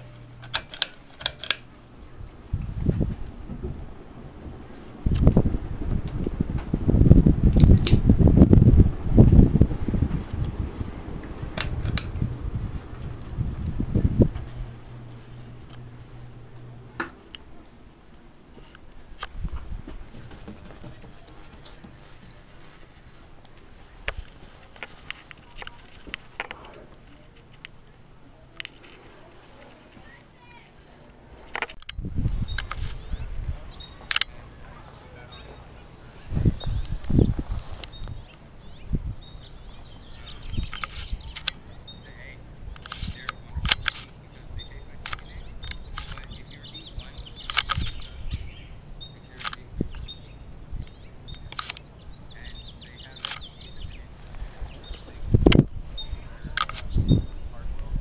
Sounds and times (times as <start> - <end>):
Mechanical fan: 0.0 - 58.0.